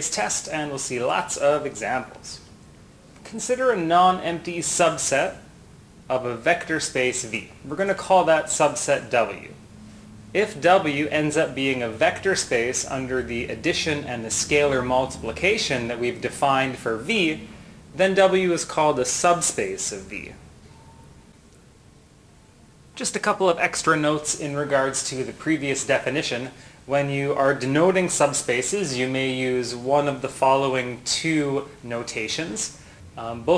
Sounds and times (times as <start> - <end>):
Speech: 0.0 - 2.5, 3.2 - 5.5, 6.1 - 9.6, 10.4 - 20.4, 23.0 - 33.5.